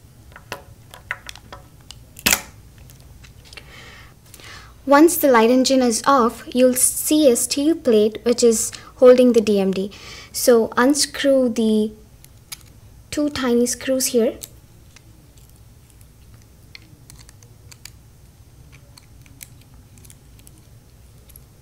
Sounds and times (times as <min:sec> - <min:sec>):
Speech: 0:04.9 - 0:12.0, 0:13.1 - 0:15.3.